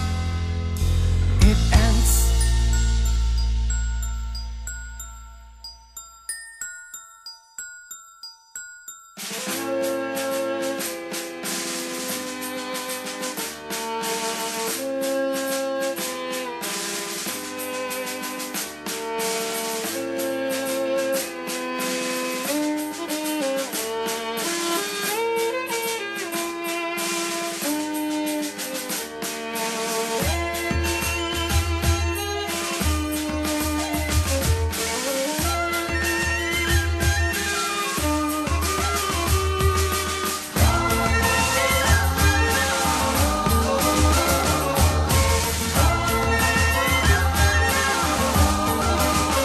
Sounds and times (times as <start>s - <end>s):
Music: 0.0s - 49.4s.